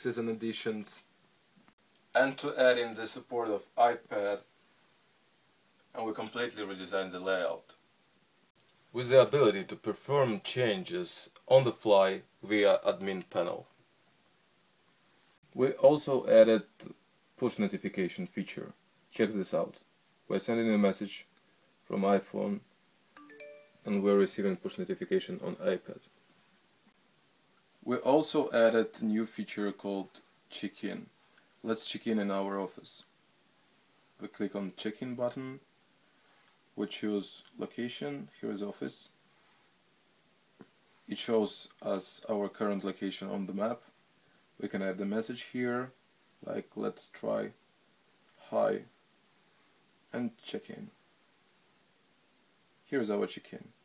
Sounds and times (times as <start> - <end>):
Speech: 0.0 - 1.1, 2.2 - 4.5, 6.0 - 7.8, 8.9 - 13.7, 15.6 - 21.3, 21.9 - 22.7, 23.8 - 26.1, 27.8 - 33.1, 34.2 - 35.7, 36.8 - 39.2, 41.1 - 44.0, 44.6 - 47.6, 48.4 - 49.0, 50.1 - 51.0, 52.9 - 53.8.